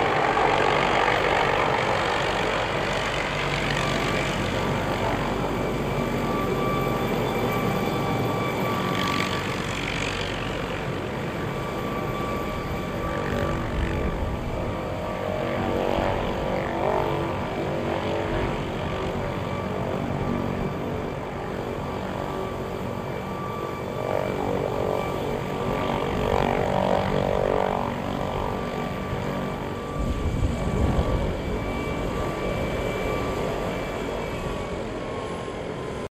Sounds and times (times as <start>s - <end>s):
Helicopter: 0.0s - 36.1s.